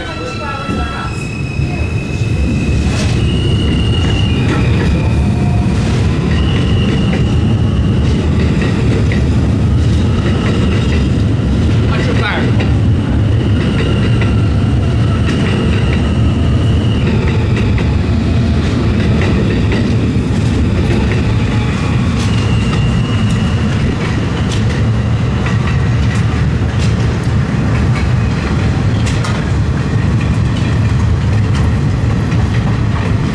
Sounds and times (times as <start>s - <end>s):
Railroad car, train wagon: 0.0s - 33.3s
Subway, metro, underground: 0.0s - 33.3s
Train: 0.0s - 33.3s
Speech: 11.9s - 12.6s.